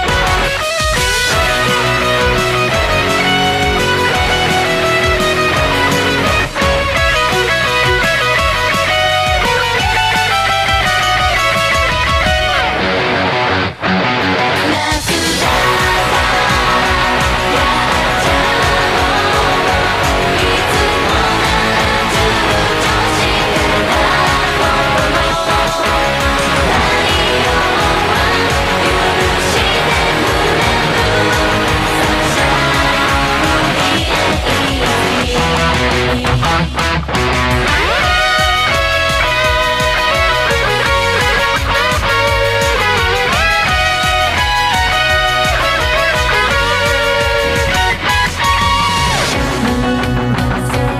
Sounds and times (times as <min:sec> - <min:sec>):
Electric guitar: 0:00.0 - 0:50.9
Strum: 0:00.0 - 0:50.9.